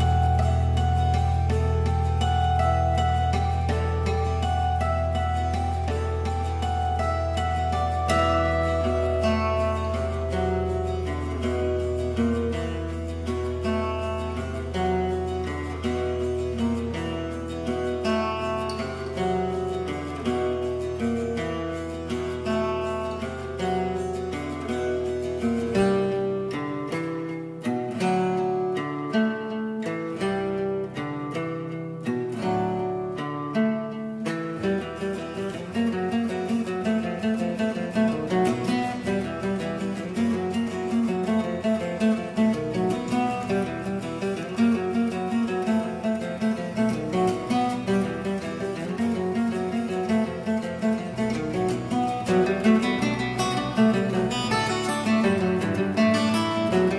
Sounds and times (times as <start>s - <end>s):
Acoustic guitar: 0.0s - 56.9s.